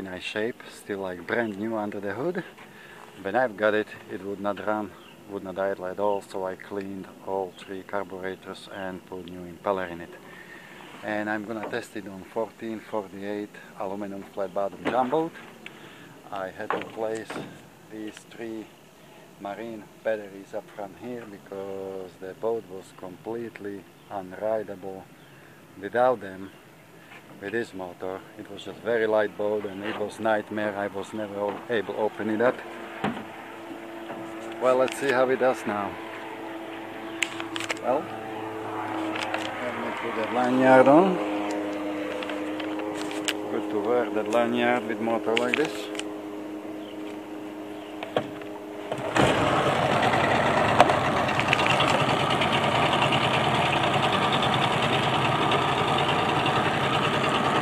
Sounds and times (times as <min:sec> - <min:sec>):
Speech: 0:00.0 - 0:02.6, 0:03.2 - 0:10.2, 0:11.0 - 0:15.4, 0:16.2 - 0:18.7, 0:19.4 - 0:25.1, 0:25.8 - 0:26.6, 0:27.4 - 0:32.7, 0:34.6 - 0:36.0, 0:37.8 - 0:38.1, 0:39.6 - 0:41.2, 0:43.5 - 0:46.0.